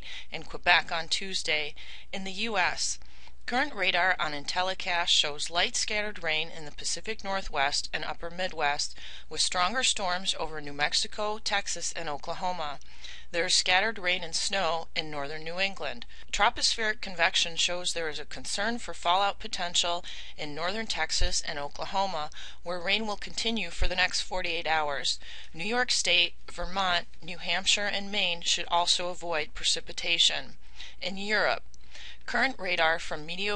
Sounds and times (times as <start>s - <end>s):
Speech: 0.3s - 31.6s, 32.3s - 33.5s.